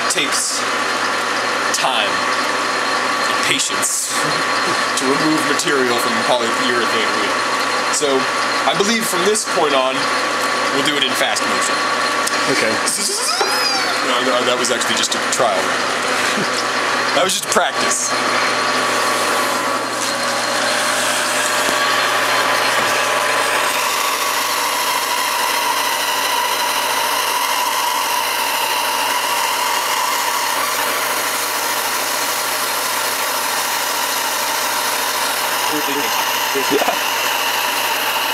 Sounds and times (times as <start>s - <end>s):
Speech: 0.0s - 0.7s, 1.7s - 2.2s, 3.3s - 10.1s, 10.7s - 13.3s, 14.0s - 15.8s, 17.1s - 18.2s, 35.7s - 37.0s.